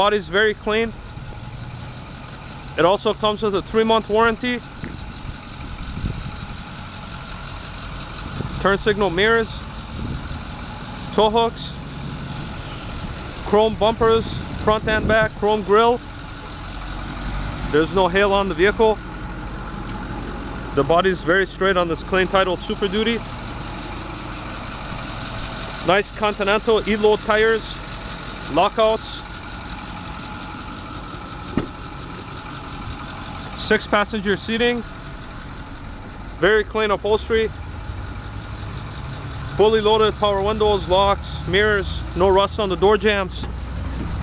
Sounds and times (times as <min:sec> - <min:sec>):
Speech: 0:00.0 - 0:01.0, 0:02.8 - 0:04.6, 0:08.6 - 0:09.7, 0:11.1 - 0:11.8, 0:13.5 - 0:16.0, 0:17.7 - 0:19.0, 0:20.8 - 0:23.2, 0:25.8 - 0:27.8, 0:28.5 - 0:29.3, 0:33.6 - 0:34.9, 0:36.4 - 0:37.6, 0:39.5 - 0:43.5
Car: 0:00.0 - 0:44.2.